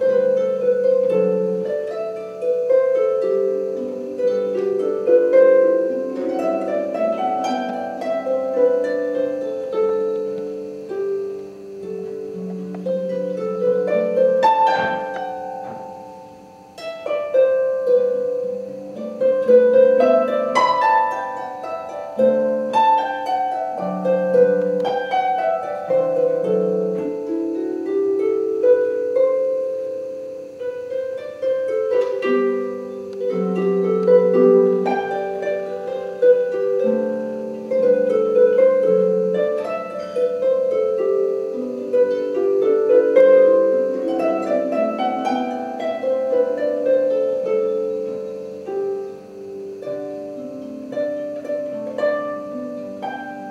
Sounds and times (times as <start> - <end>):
Inside, large room or hall: 0.0 - 29.9
Harp: 0.0 - 53.5
Plucked string instrument: 0.0 - 53.5.